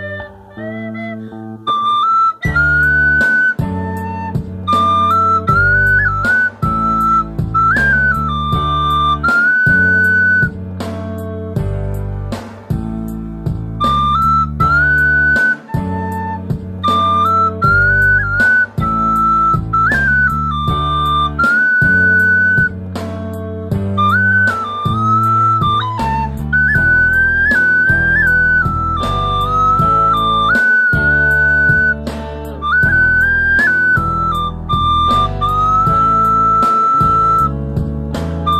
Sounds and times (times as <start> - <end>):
Flute: 0.0 - 10.6, 13.7 - 22.9, 23.7 - 38.5.